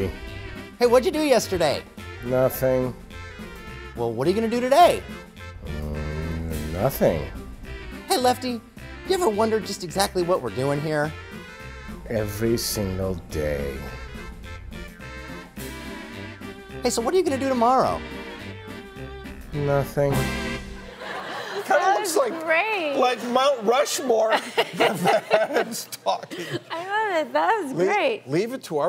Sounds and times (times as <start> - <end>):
Music: 0.0 - 24.0
Male speech, man speaking: 0.8 - 3.0, 4.0 - 5.1, 5.7 - 7.4, 8.1 - 11.2, 12.1 - 14.0, 16.8 - 18.0, 19.6 - 20.3, 21.6 - 24.5, 25.5 - 26.4, 27.6 - 28.8.